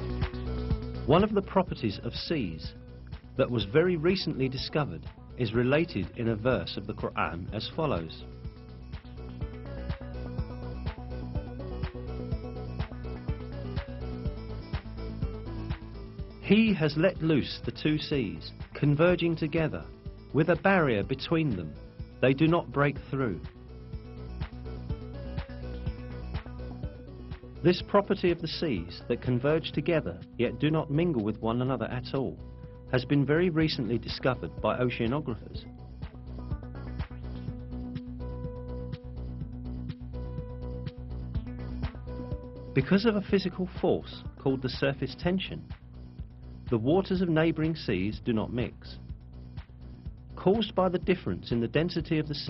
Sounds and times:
Music: 0.0 - 52.4
Speech: 1.1 - 2.7, 3.4 - 8.3, 16.4 - 23.5, 27.6 - 35.6, 42.8 - 45.7, 46.7 - 49.0, 50.4 - 52.4.

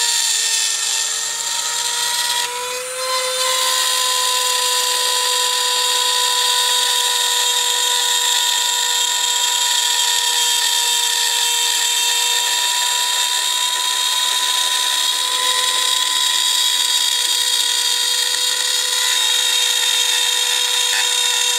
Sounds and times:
Drill: 0.0 - 21.5
Wood: 0.0 - 21.5.

